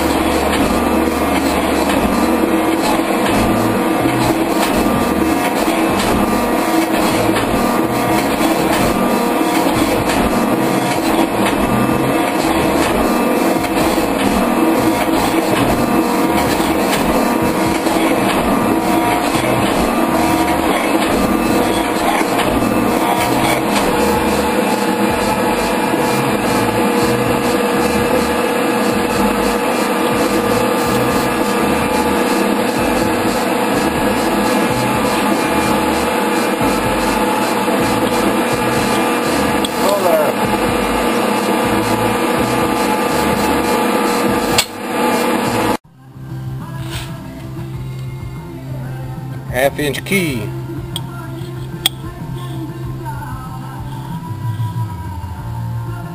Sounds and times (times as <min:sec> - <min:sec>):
Speech: 0:39.8 - 0:40.4, 0:49.5 - 0:50.6.